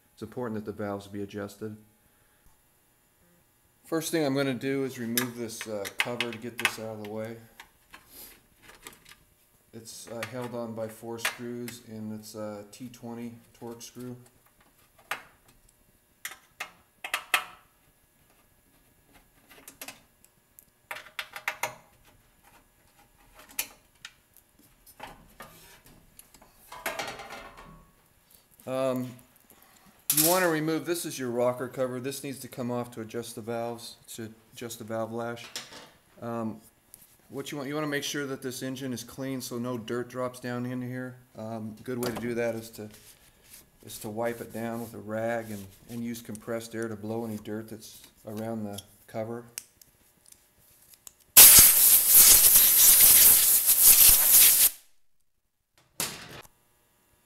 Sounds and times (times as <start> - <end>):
Speech: 0.2 - 1.9, 3.9 - 7.5, 9.7 - 14.3, 28.6 - 29.3, 30.1 - 35.6, 36.2 - 36.7, 37.3 - 43.0, 43.8 - 49.6.